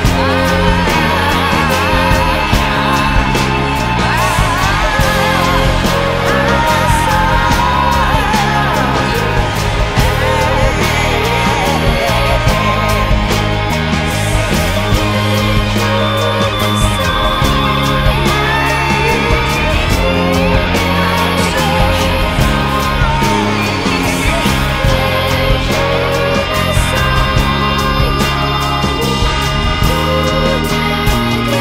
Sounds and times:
Progressive rock: 0:00.0 - 0:31.6
Psychedelic rock: 0:00.0 - 0:31.6.

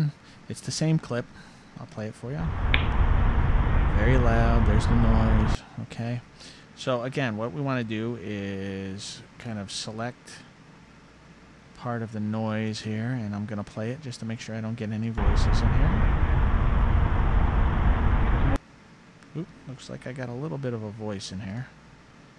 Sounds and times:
Speech: 0:00.0 - 0:02.5, 0:04.0 - 0:10.5, 0:11.8 - 0:16.0, 0:19.3 - 0:21.8.

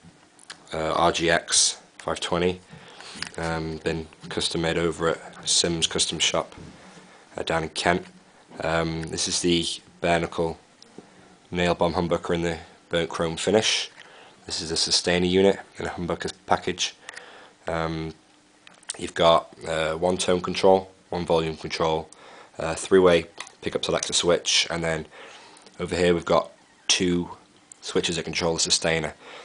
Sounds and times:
Speech: 0:00.5 - 0:02.7, 0:03.3 - 0:06.6, 0:07.4 - 0:10.6, 0:11.5 - 0:17.0, 0:17.7 - 0:18.2, 0:18.9 - 0:25.1, 0:25.8 - 0:29.2.

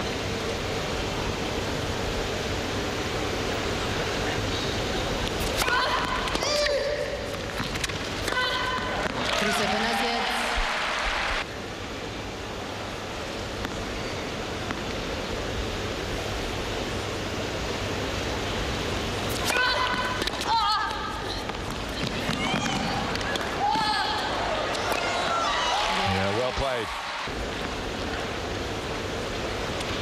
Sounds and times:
Inside, public space: 0:00.0 - 0:30.0.

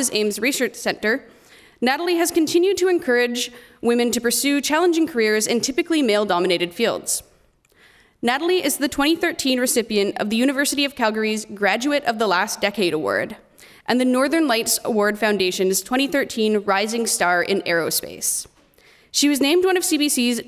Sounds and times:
Speech: 0:00.0 - 0:01.2, 0:01.8 - 0:07.3, 0:08.2 - 0:18.5, 0:19.2 - 0:20.4.

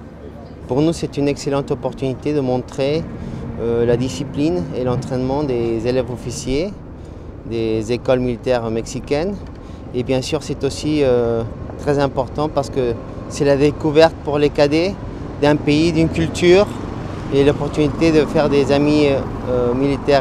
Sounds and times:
Speech: 0:00.2 - 0:03.0, 0:03.6 - 0:06.8, 0:07.5 - 0:09.4, 0:10.0 - 0:20.2.

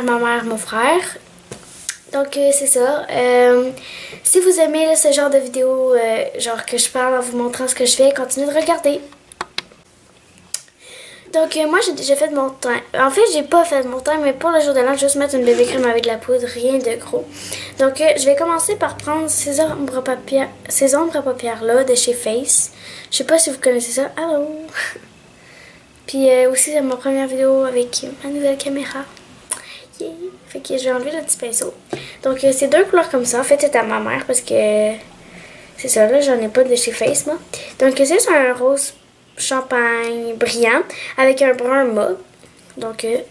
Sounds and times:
Speech: 0:00.0 - 0:01.2, 0:02.1 - 0:09.1, 0:11.3 - 0:25.0, 0:26.1 - 0:29.2, 0:29.9 - 0:35.1, 0:35.8 - 0:43.3.

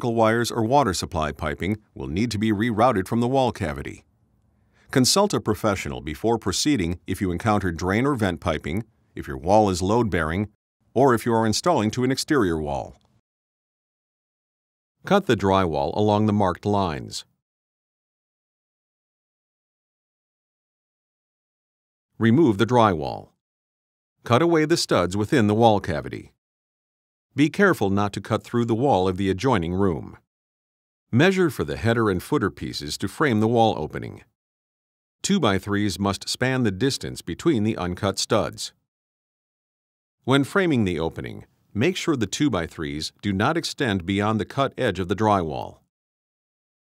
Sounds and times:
Speech: 0:00.0 - 0:04.0, 0:04.9 - 0:13.0, 0:15.0 - 0:17.3, 0:22.2 - 0:23.4, 0:24.2 - 0:26.4, 0:27.4 - 0:30.2, 0:31.2 - 0:34.4, 0:35.2 - 0:38.8, 0:40.2 - 0:45.9.

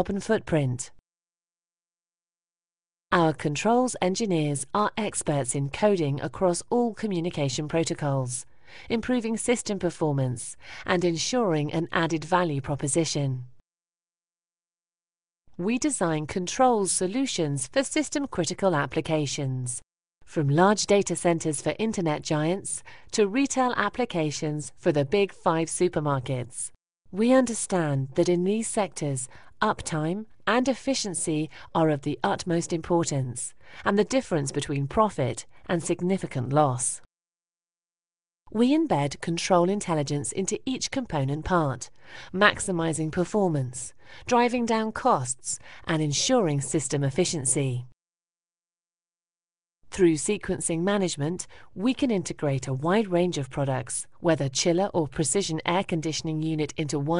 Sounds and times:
Speech: 0:00.0 - 0:01.0, 0:03.1 - 0:13.5, 0:15.6 - 0:37.1, 0:38.5 - 0:47.9, 0:49.9 - 0:57.2.

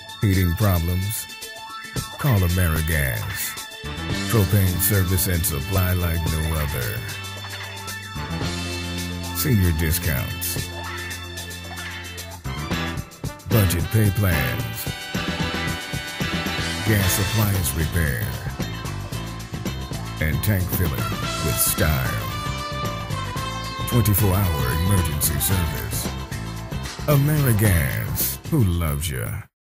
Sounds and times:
Music: 0:00.0 - 0:29.5
Speech: 0:00.2 - 0:01.3, 0:02.2 - 0:03.6, 0:04.2 - 0:07.2, 0:09.4 - 0:10.7, 0:13.5 - 0:14.9, 0:16.8 - 0:18.5, 0:20.2 - 0:22.4, 0:23.9 - 0:26.1, 0:27.1 - 0:29.5.

